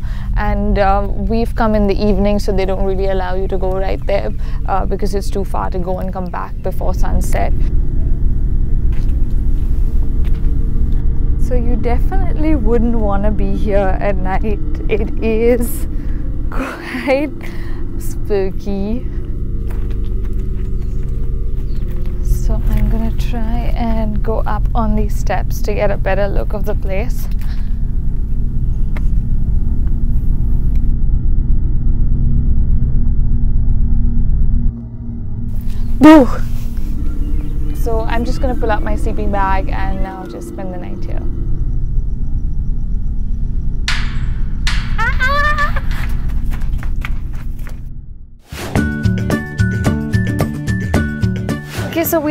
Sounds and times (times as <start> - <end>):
Outside, rural or natural: 0.0 - 52.3
Speech: 0.4 - 7.7, 11.4 - 15.8, 18.0 - 19.1, 22.3 - 27.3, 37.7 - 41.2, 51.9 - 52.3.